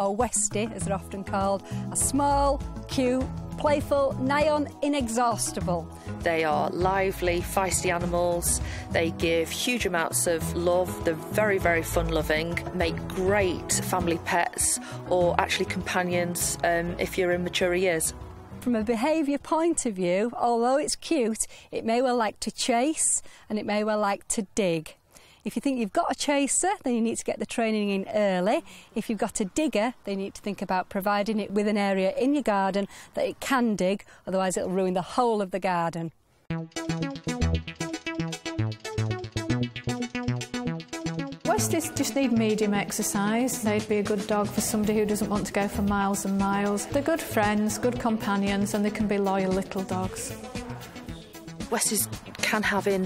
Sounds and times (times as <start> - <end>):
Music: 0.0 - 20.4, 36.5 - 53.0
Speech: 0.0 - 36.2, 41.5 - 50.9, 51.7 - 53.0.